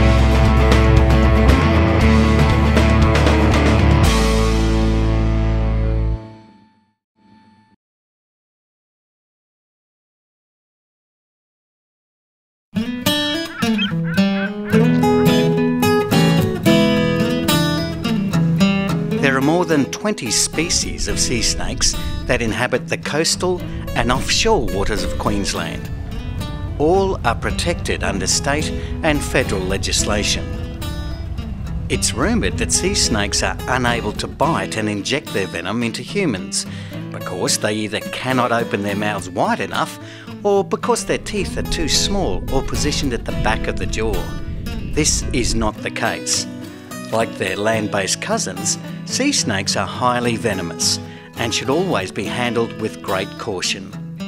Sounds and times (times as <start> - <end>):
Music: 0.0 - 7.8, 12.8 - 54.2
Speech: 19.2 - 25.9, 26.8 - 30.6, 31.9 - 44.3, 44.9 - 46.5, 47.1 - 54.0.